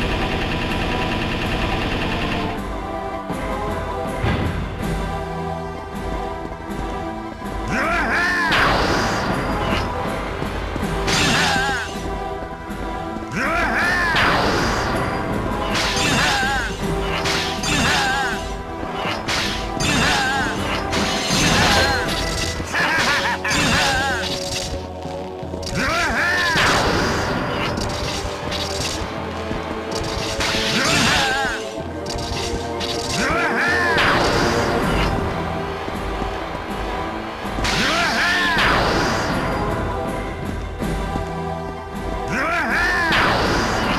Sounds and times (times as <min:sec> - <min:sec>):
Music: 0:00.0 - 0:43.9.